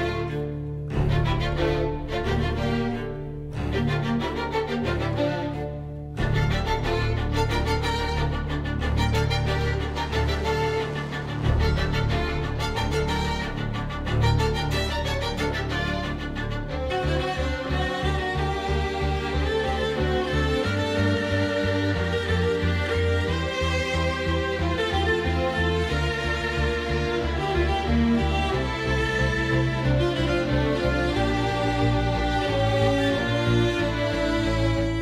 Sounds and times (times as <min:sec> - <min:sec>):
Violin, fiddle: 0:00.0 - 0:35.0.